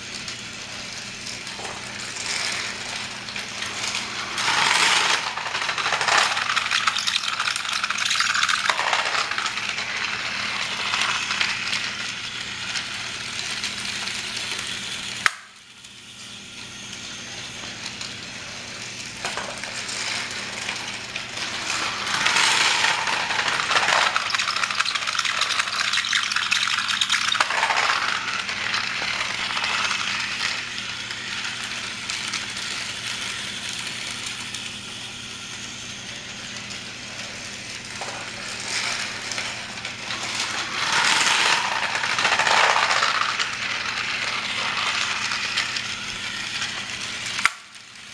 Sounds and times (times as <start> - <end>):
Rattle: 0.0 - 15.3, 17.8 - 34.7, 36.5 - 48.1
Inside, small room: 0.0 - 48.1.